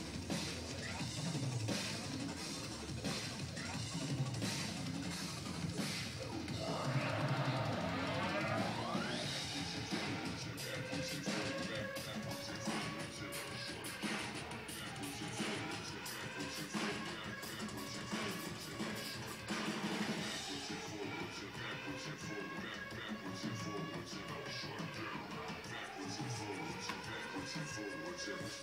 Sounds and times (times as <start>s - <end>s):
Music: 0.0s - 28.6s.